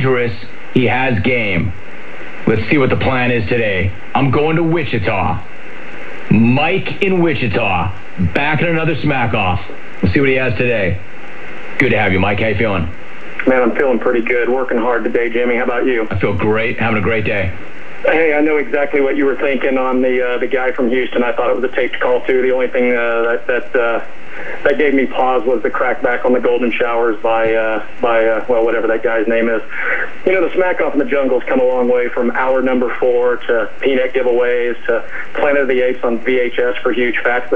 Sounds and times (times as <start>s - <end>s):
Speech: 0.0s - 1.8s, 2.4s - 5.5s, 6.3s - 11.0s, 11.8s - 37.5s.